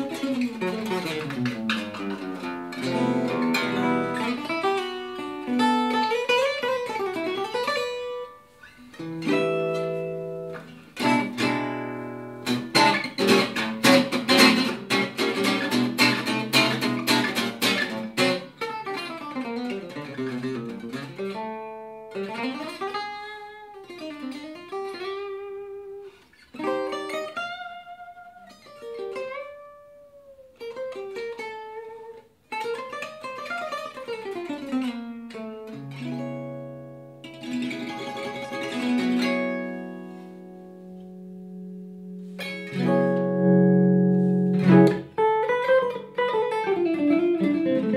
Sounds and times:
Strum: 0.0s - 30.2s, 34.6s - 47.9s
Acoustic guitar: 0.0s - 47.9s.

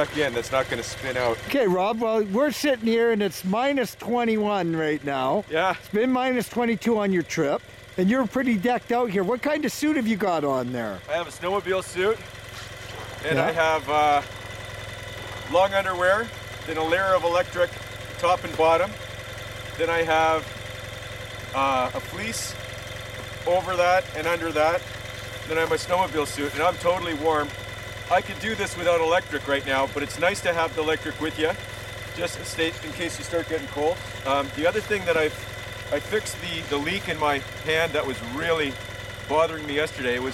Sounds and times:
Speech: 0.0s - 12.2s, 13.2s - 14.2s, 15.5s - 19.0s, 19.8s - 20.5s, 21.6s - 22.6s, 23.4s - 24.8s, 25.5s - 27.5s, 28.1s - 31.6s, 32.2s - 40.3s
Vibration: 0.0s - 40.3s.

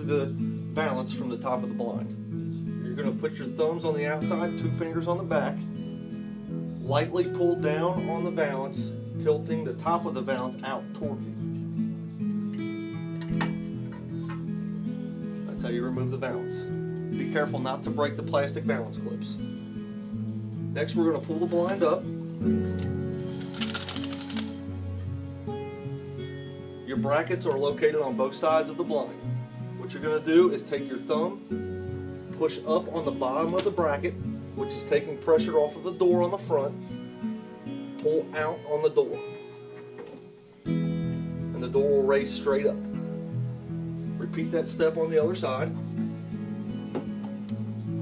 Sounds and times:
Speech: 0.0s - 2.1s, 2.8s - 5.6s, 6.8s - 11.4s, 15.5s - 19.4s, 20.8s - 22.1s, 26.9s - 29.2s, 29.8s - 31.4s, 32.4s - 36.8s, 38.0s - 39.2s, 41.6s - 42.8s, 44.2s - 45.8s
Music: 0.0s - 48.0s.

